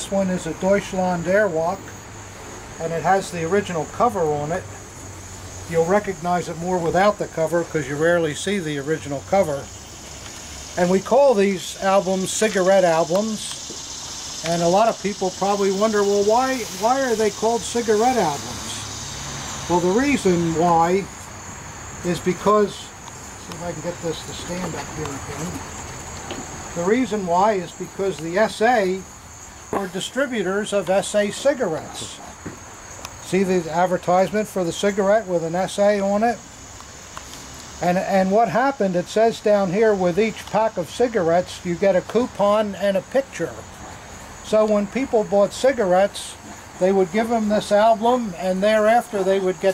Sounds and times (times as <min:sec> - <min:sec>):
Speech: 0:00.0 - 0:01.9, 0:02.8 - 0:04.8, 0:05.7 - 0:09.7, 0:10.8 - 0:13.6, 0:14.4 - 0:18.9, 0:19.7 - 0:21.1, 0:22.0 - 0:25.6, 0:26.8 - 0:29.1, 0:29.8 - 0:32.4, 0:33.2 - 0:36.4, 0:37.8 - 0:43.6, 0:44.4 - 0:49.7
Outside, rural or natural: 0:00.0 - 0:49.7.